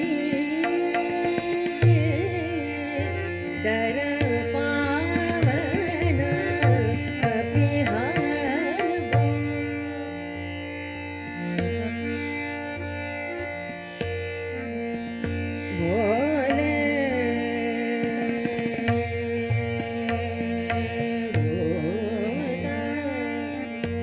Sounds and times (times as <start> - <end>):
Singing: 0.0 - 9.2, 15.7 - 24.0
Carnatic music: 0.0 - 24.0
Sitar: 0.0 - 24.0.